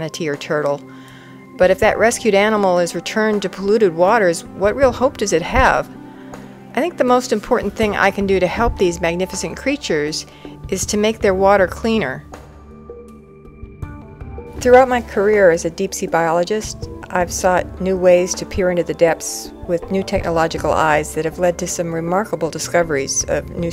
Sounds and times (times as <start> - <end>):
Speech: 1.6 - 5.9, 6.8 - 12.2, 14.6 - 23.7.